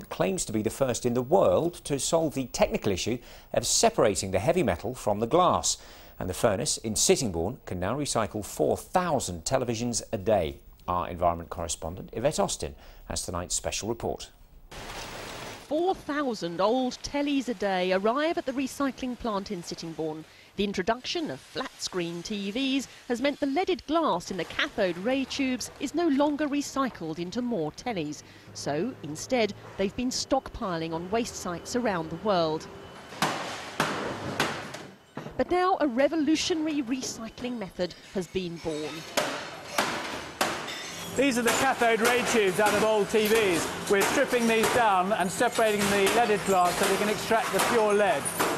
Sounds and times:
Speech: 0.1s - 14.3s, 15.7s - 32.6s, 35.4s - 39.0s, 41.2s - 48.2s.

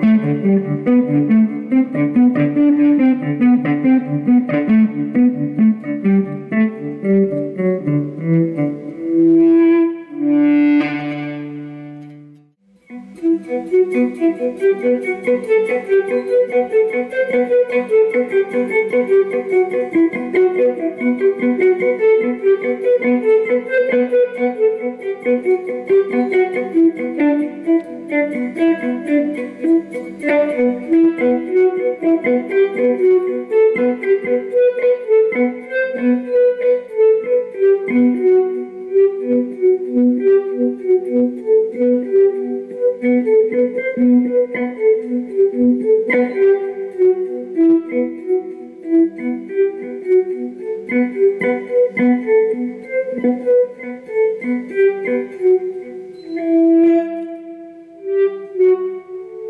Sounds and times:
Violin, fiddle: 12.9s - 59.5s.

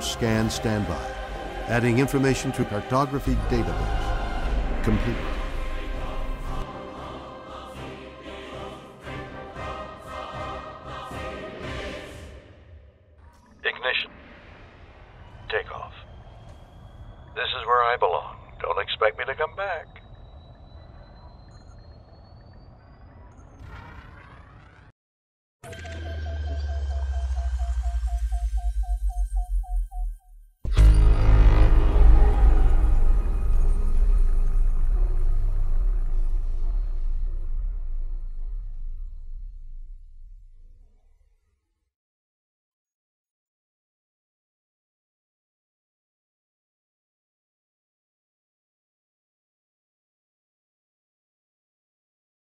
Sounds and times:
Silence: 12.1s - 25.0s, 30.7s - 41.7s.

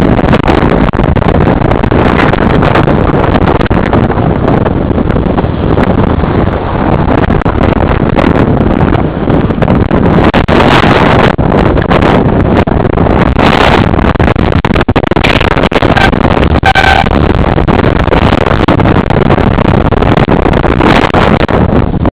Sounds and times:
Bus: 0.0s - 22.1s.

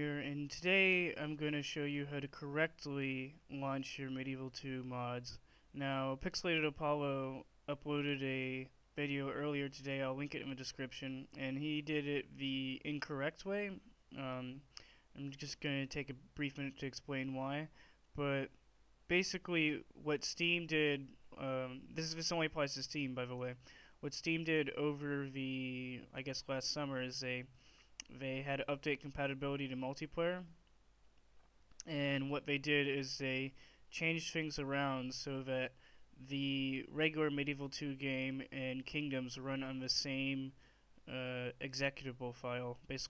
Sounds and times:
Speech: 0.0s - 30.6s, 31.8s - 43.0s.

